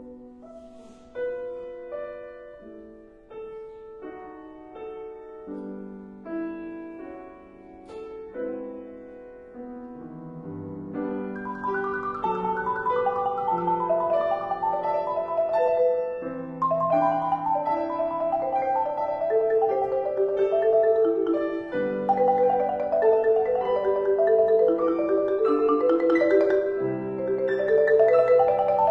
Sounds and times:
Piano: 0.0s - 28.9s
Marimba, xylophone: 11.4s - 28.9s.

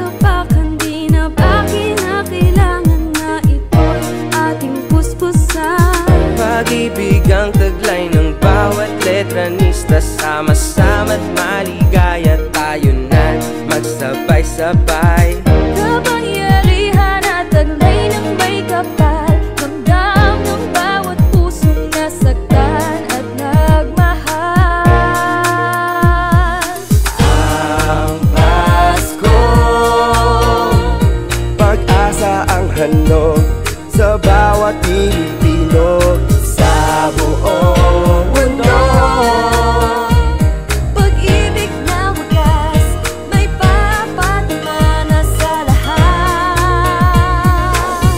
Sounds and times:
Music: 0.0s - 48.1s.

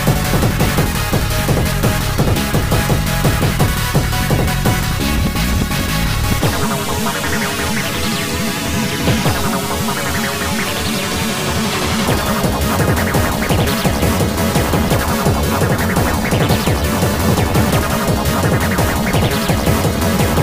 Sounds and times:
Dance music: 0.0s - 20.4s
Soundtrack music: 0.0s - 20.4s.

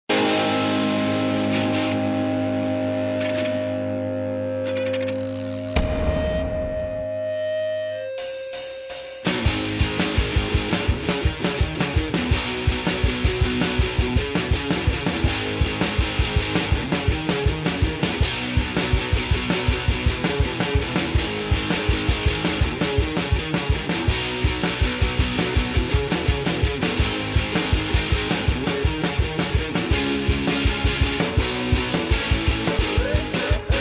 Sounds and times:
Electric guitar: 0.1s - 33.8s.

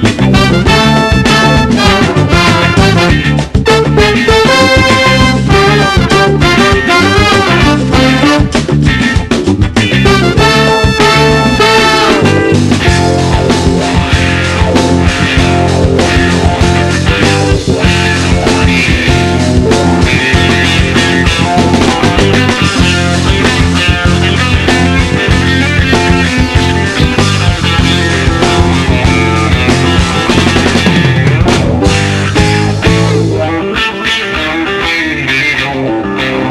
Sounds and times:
Funk: 0.0s - 36.5s.

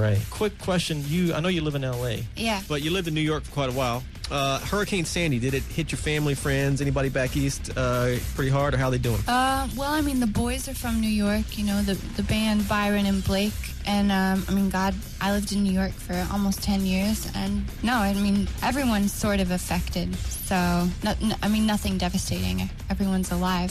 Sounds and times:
Music: 0.0s - 23.7s
Speech: 0.0s - 23.7s.

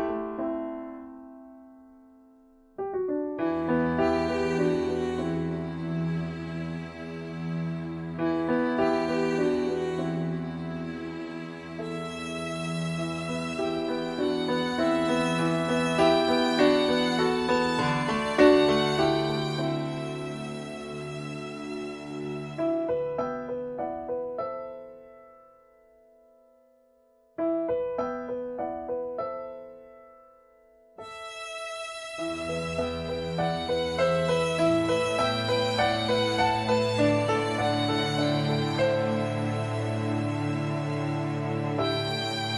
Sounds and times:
New-age music: 0.0s - 42.5s.

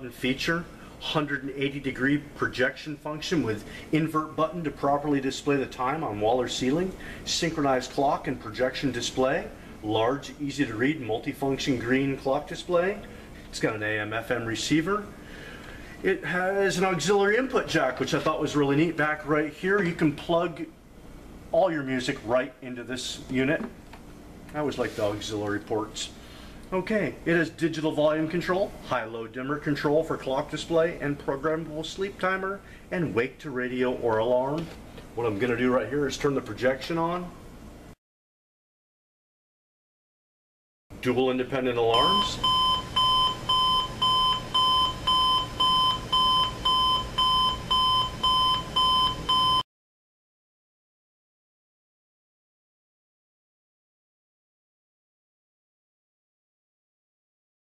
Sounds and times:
Speech: 0.0s - 15.1s, 16.0s - 20.8s, 21.5s - 23.8s, 24.5s - 37.4s, 41.0s - 42.5s.

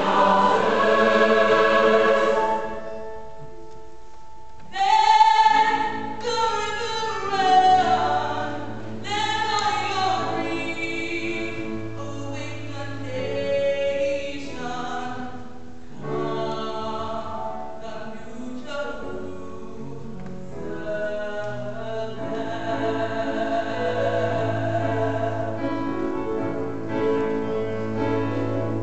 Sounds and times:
Music: 0.0s - 28.8s.

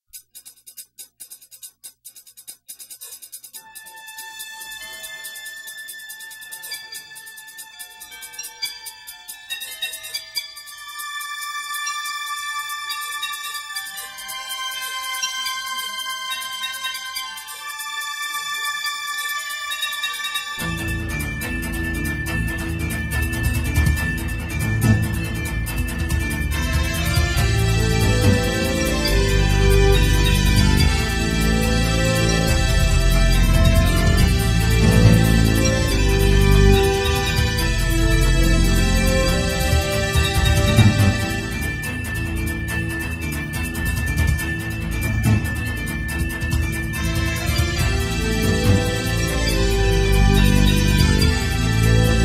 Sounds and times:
Music: 0.0s - 52.2s.

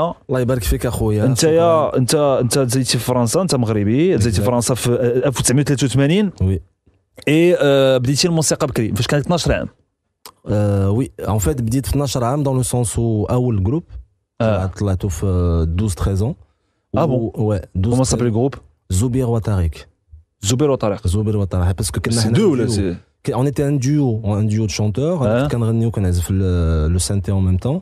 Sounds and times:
Speech: 0.0s - 6.6s, 7.2s - 16.4s, 17.0s - 27.8s.

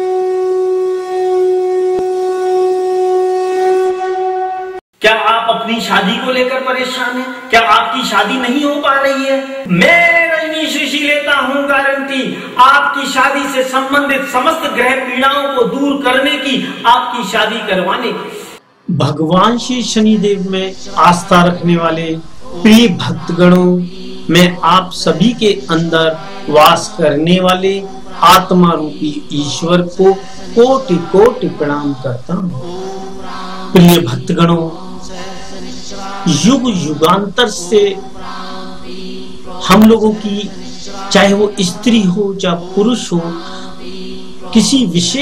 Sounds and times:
Speech: 5.0s - 32.9s, 33.8s - 34.8s, 36.3s - 38.0s, 39.6s - 43.5s, 44.5s - 45.2s
Mantra: 5.0s - 45.2s.

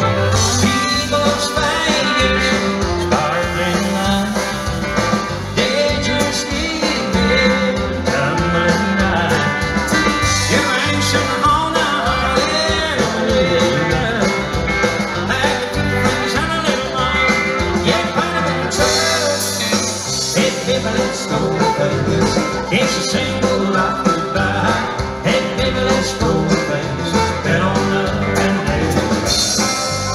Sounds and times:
Bluegrass: 0.0s - 30.1s.

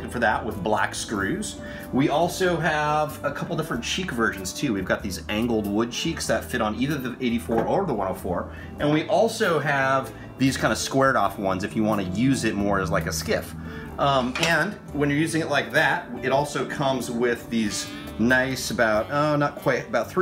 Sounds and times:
Music: 0.0s - 20.2s
Speech: 0.0s - 20.2s.

